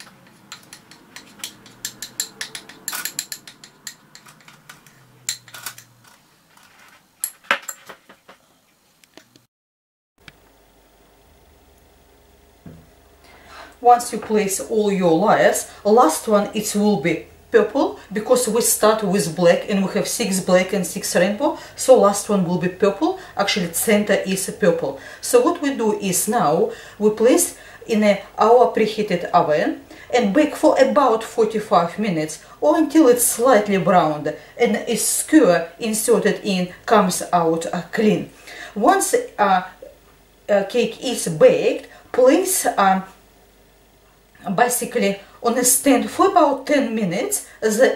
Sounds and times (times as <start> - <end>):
Speech: 13.8 - 39.9, 40.5 - 43.2, 44.4 - 47.9.